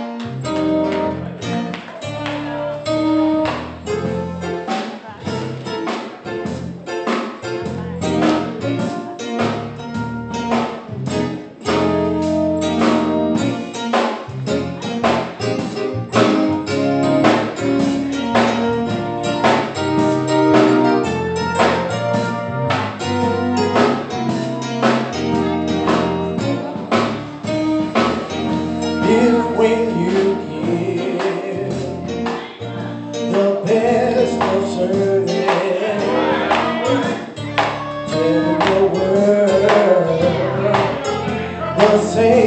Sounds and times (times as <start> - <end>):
Music: 0.0 - 42.4
Male singing: 29.0 - 37.4, 38.0 - 42.4.